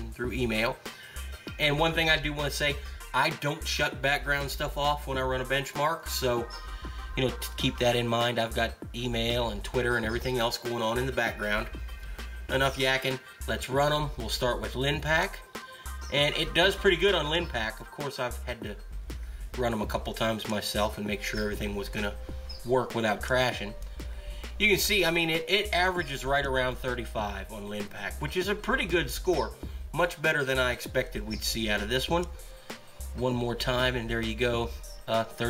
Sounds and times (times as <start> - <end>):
Speech: 0.0 - 0.8, 1.5 - 6.6, 7.2 - 11.8, 12.5 - 15.4, 16.1 - 18.8, 19.6 - 23.8, 24.6 - 32.3, 33.2 - 35.5
Music: 0.0 - 35.5.